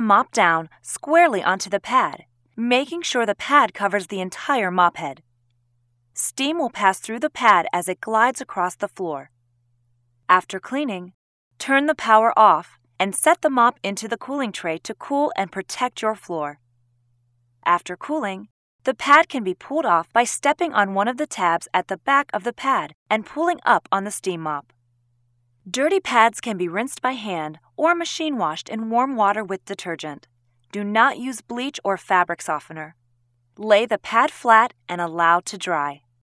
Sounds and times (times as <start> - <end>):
Speech: 0.0 - 5.2, 6.2 - 9.3, 10.3 - 16.6, 17.6 - 24.7, 25.7 - 33.0, 33.6 - 36.0.